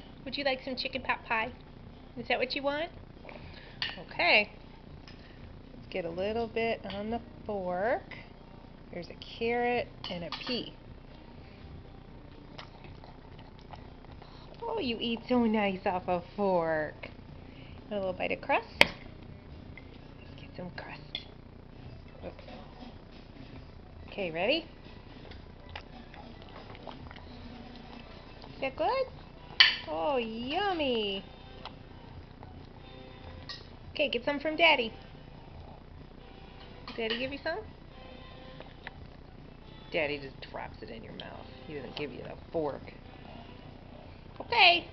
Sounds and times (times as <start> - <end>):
Speech: 0.3 - 1.6, 4.0 - 4.6, 5.9 - 8.2, 24.1 - 24.7, 29.9 - 31.3, 37.0 - 37.7, 40.0 - 43.0.